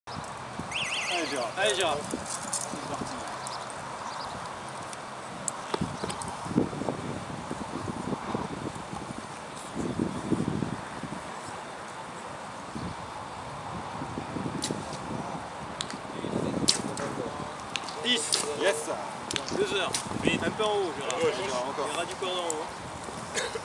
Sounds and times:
Speech: 0:01.1 - 0:02.1, 0:02.7 - 0:03.4, 0:16.2 - 0:22.7.

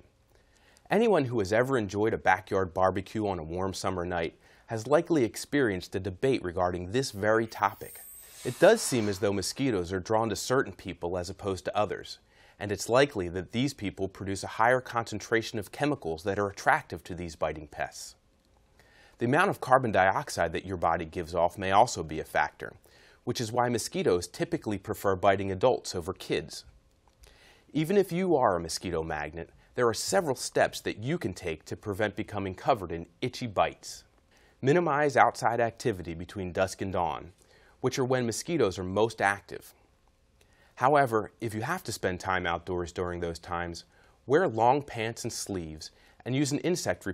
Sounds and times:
Speech: 0:00.9 - 0:18.2, 0:19.2 - 0:26.7, 0:27.7 - 0:39.8, 0:40.8 - 0:47.1.

